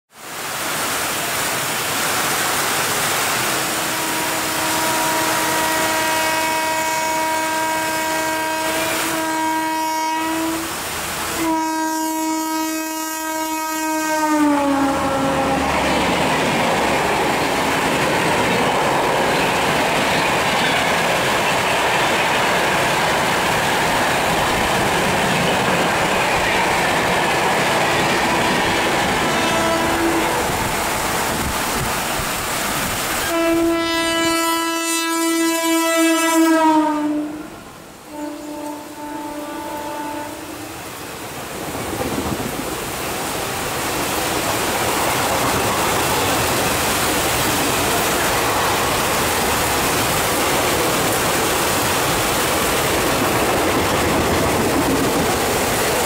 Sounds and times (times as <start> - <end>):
Railroad car, train wagon: 0.1 - 56.0
Subway, metro, underground: 0.1 - 56.0
Train: 0.1 - 56.0.